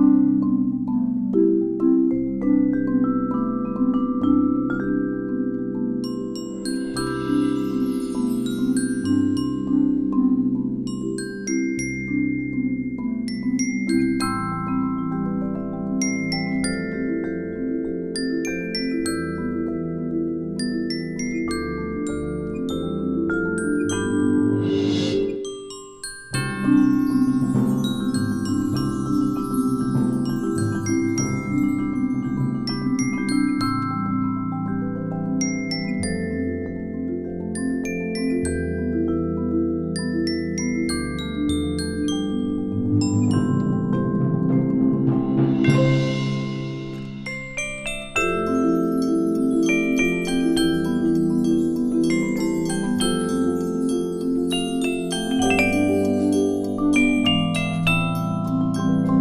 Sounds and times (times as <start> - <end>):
Glockenspiel: 0.0 - 59.2
Marimba, xylophone: 0.0 - 59.2.